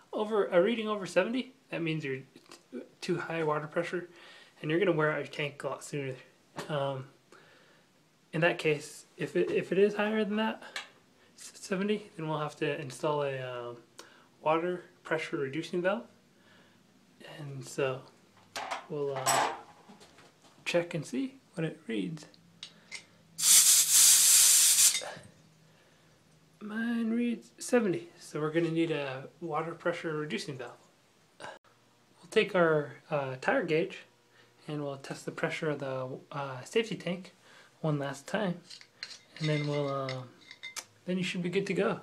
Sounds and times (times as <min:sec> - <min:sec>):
Inside, small room: 0:00.0 - 0:42.0
Speech: 0:00.1 - 0:07.2, 0:08.3 - 0:10.6, 0:11.4 - 0:13.8, 0:14.4 - 0:16.1, 0:17.2 - 0:18.1, 0:18.9 - 0:19.5, 0:20.6 - 0:22.4, 0:26.6 - 0:30.8, 0:32.2 - 0:38.7, 0:39.4 - 0:40.4, 0:41.0 - 0:42.0.